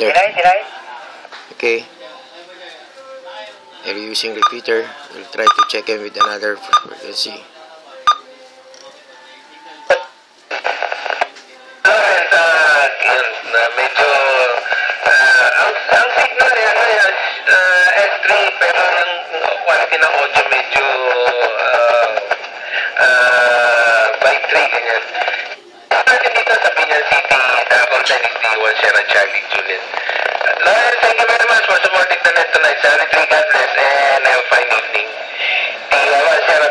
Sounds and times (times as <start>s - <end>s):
Radio: 0.0s - 1.8s, 8.1s - 36.7s
Speech: 30.6s - 35.2s, 35.9s - 36.7s.